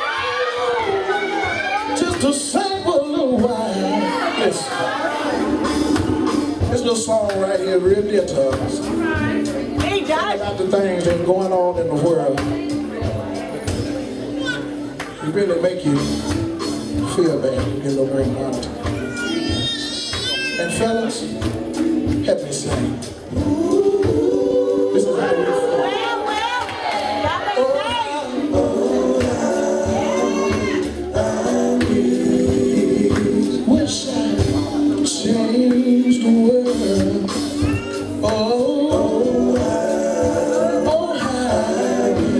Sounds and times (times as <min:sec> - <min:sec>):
Male singing: 0:01.9 - 0:04.8, 0:06.7 - 0:09.0, 0:22.1 - 0:26.0, 0:27.3 - 0:42.3
Choir: 0:23.3 - 0:42.3.